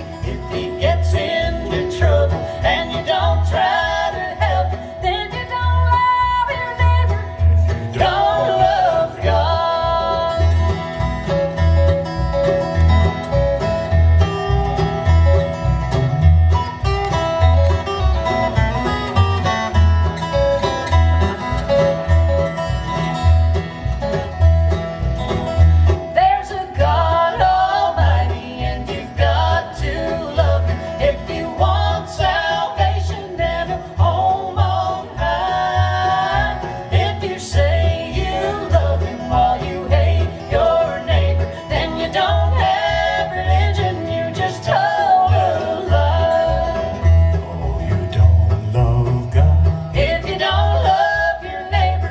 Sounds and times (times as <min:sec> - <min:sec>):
Bowed string instrument: 0:00.0 - 0:52.1
Country: 0:00.0 - 0:52.1.